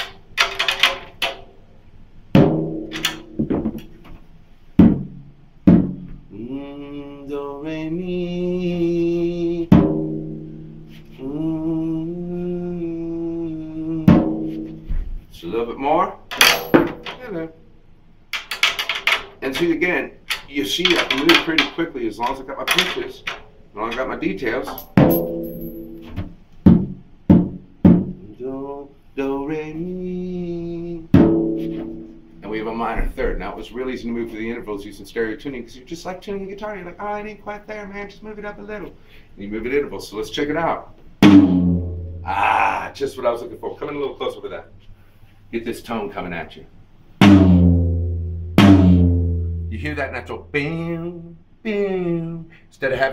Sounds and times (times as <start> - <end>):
Inside, small room: 0.0 - 53.1.